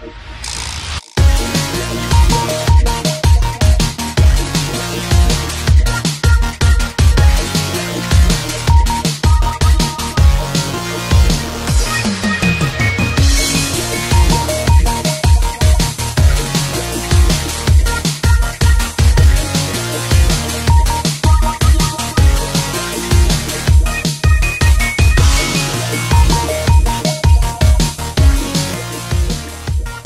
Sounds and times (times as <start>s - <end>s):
Music: 0.0s - 30.0s.